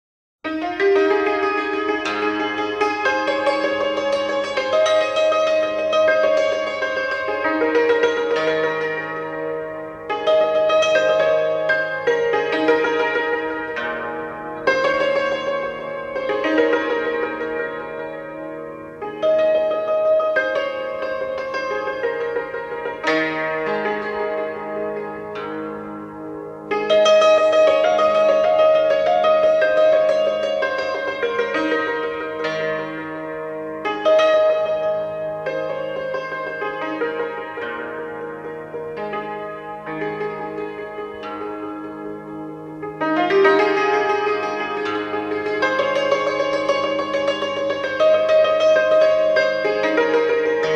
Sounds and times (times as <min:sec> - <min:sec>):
Music: 0:00.4 - 0:50.7.